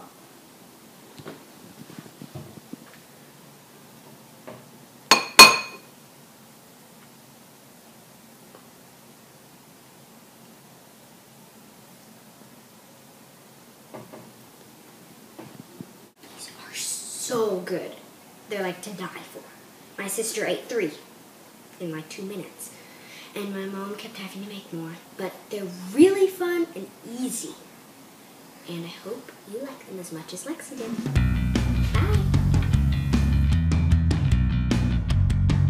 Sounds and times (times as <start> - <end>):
Child speech, kid speaking: 16.4 - 21.1, 21.8 - 22.7, 23.4 - 27.7, 28.7 - 31.1, 32.0 - 32.4.